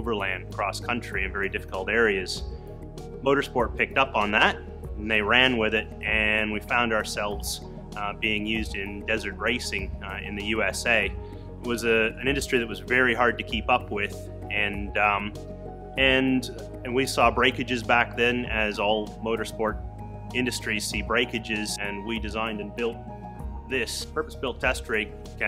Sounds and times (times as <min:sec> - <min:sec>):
Speech: 0:00.0 - 0:02.5, 0:03.2 - 0:15.4, 0:16.0 - 0:23.0, 0:23.7 - 0:25.4
Music: 0:00.0 - 0:25.4.